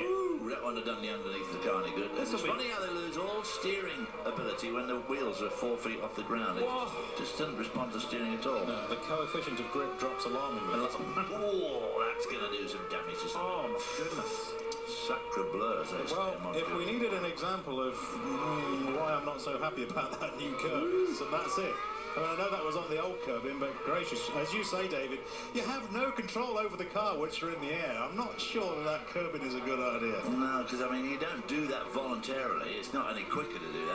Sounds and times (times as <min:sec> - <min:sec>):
Motor vehicle (road): 0:00.0 - 0:33.9
Speech: 0:00.0 - 0:33.9.